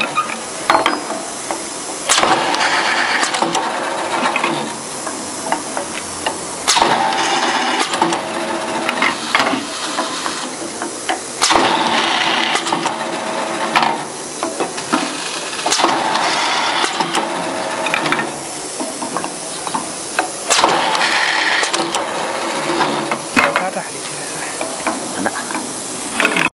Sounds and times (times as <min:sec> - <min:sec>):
Speech: 0:23.5 - 0:24.6.